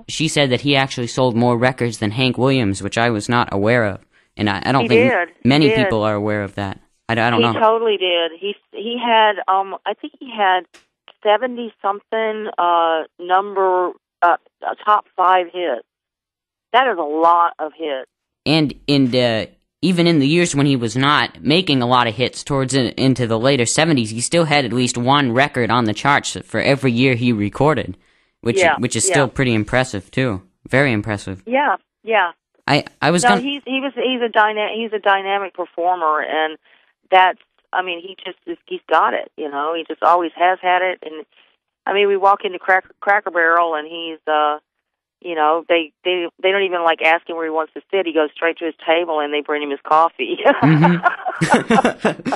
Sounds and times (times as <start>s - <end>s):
Speech: 0.0s - 15.8s, 16.8s - 41.2s, 41.9s - 44.6s, 45.2s - 52.3s.